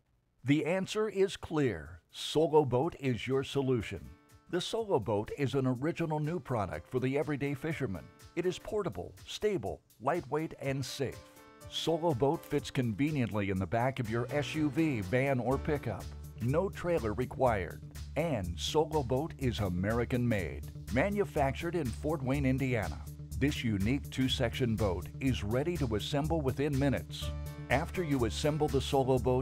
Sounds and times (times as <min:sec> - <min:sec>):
Speech: 0:00.4 - 0:29.4
Music: 0:02.3 - 0:29.4.